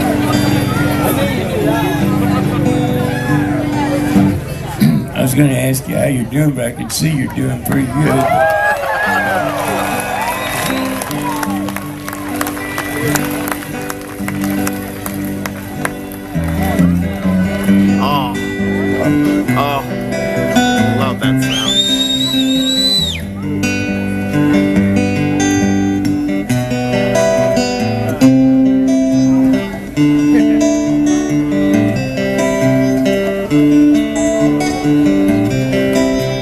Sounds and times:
Music: 0:00.0 - 0:06.1, 0:08.0 - 0:36.4.

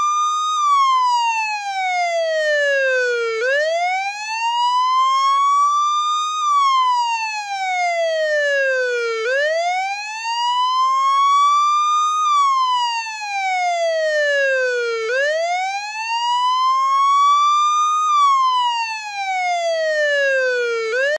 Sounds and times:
Police car (siren): 0:00.0 - 0:21.1.

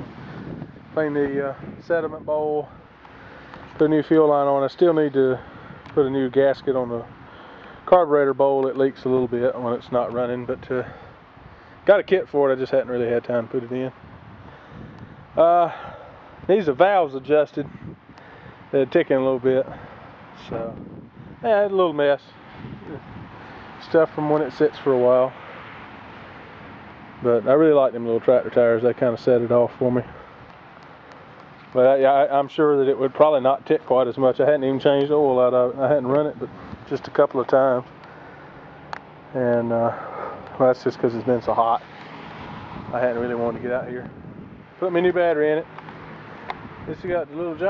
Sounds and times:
Speech: 0:01.0 - 0:02.8, 0:03.8 - 0:05.4, 0:06.0 - 0:07.1, 0:07.9 - 0:11.0, 0:11.8 - 0:14.0, 0:15.4 - 0:15.8, 0:16.5 - 0:17.7, 0:18.8 - 0:19.8, 0:20.4 - 0:20.8, 0:21.4 - 0:23.0, 0:23.8 - 0:25.4, 0:27.2 - 0:30.2, 0:31.7 - 0:37.9, 0:39.3 - 0:40.0, 0:40.6 - 0:41.8, 0:42.9 - 0:44.1, 0:44.8 - 0:45.7, 0:46.9 - 0:47.7.

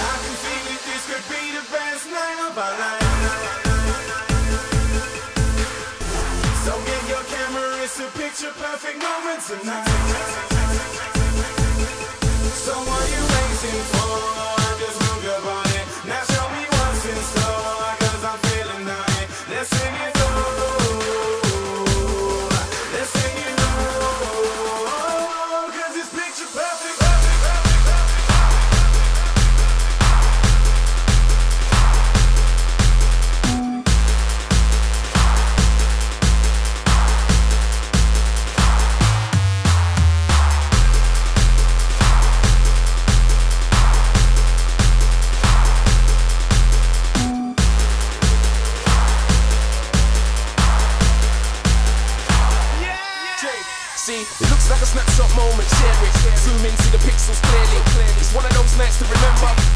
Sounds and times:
Dubstep: 0:00.0 - 0:59.7.

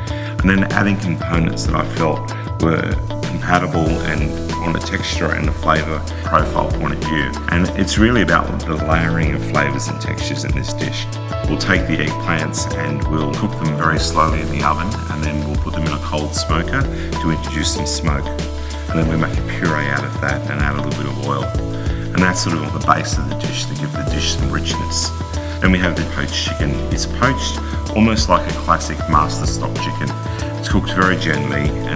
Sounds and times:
Music: 0:00.0 - 0:31.9
Speech: 0:00.4 - 0:31.9.

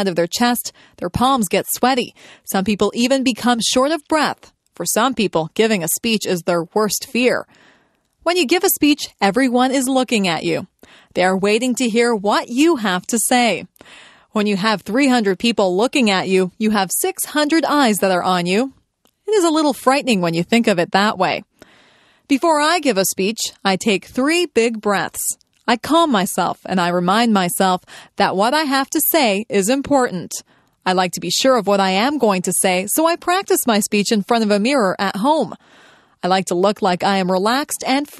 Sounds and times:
Female speech, woman speaking: 0:00.0 - 0:07.5, 0:08.3 - 0:13.7, 0:14.4 - 0:18.7, 0:19.3 - 0:21.5, 0:22.3 - 0:35.6, 0:36.2 - 0:38.1.

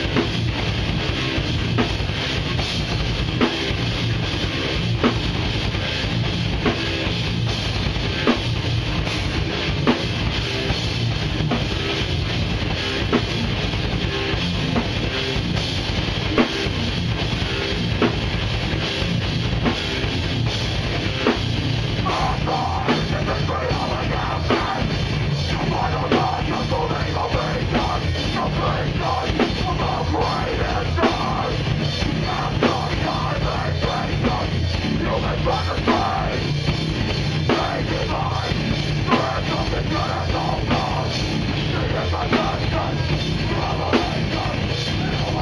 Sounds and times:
Bass drum: 0:00.0 - 0:45.4
Drum kit: 0:00.0 - 0:45.4
Singing: 0:22.0 - 0:24.9, 0:25.5 - 0:36.4, 0:37.5 - 0:45.4.

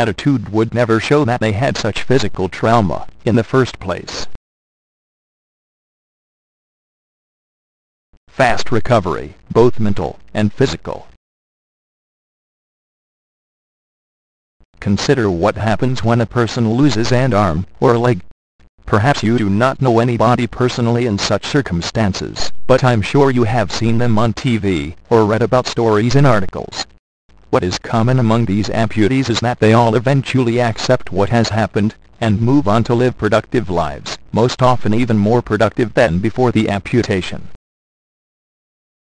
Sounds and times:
Speech synthesizer: 0:00.0 - 0:04.4, 0:08.4 - 0:11.1, 0:14.8 - 0:18.2, 0:18.9 - 0:26.9, 0:27.6 - 0:37.6.

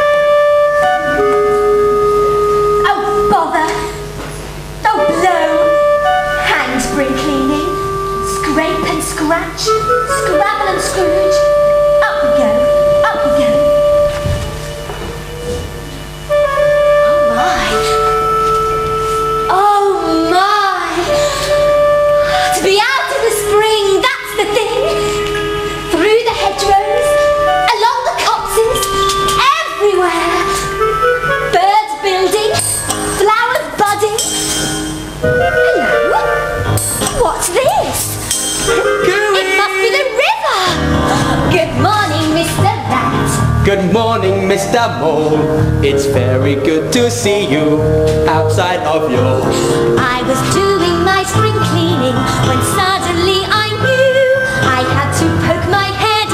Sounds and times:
Music: 0:00.0 - 0:56.3.

